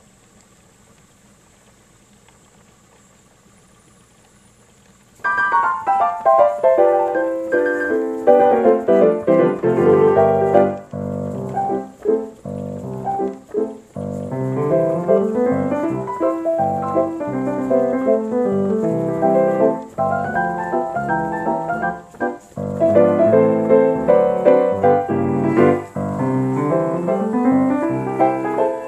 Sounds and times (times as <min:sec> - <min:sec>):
Music: 0:05.3 - 0:28.8.